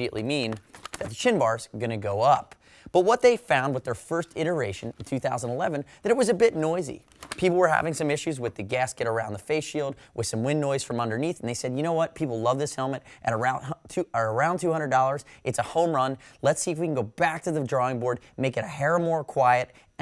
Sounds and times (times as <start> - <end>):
Speech: 0.0 - 20.0.